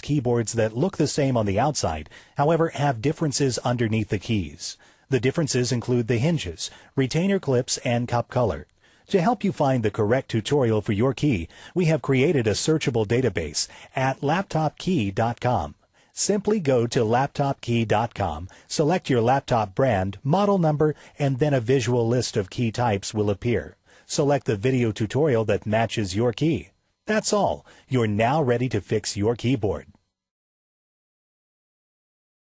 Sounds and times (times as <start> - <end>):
Speech: 0.0 - 30.0.